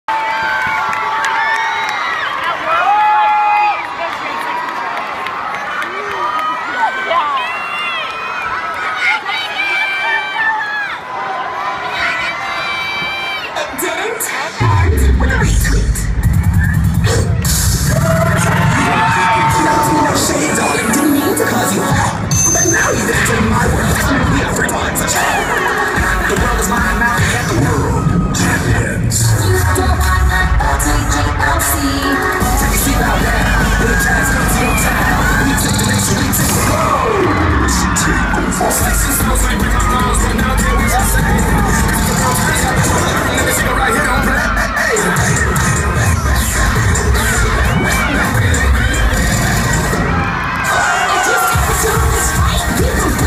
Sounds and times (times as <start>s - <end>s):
Cheering: 0.0s - 53.2s.